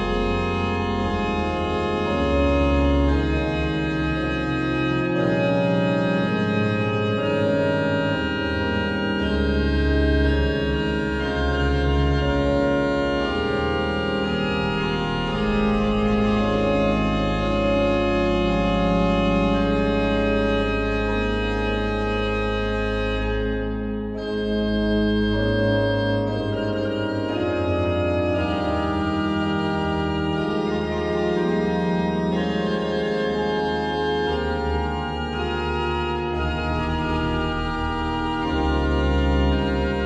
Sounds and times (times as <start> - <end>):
Piano: 0.0 - 40.0.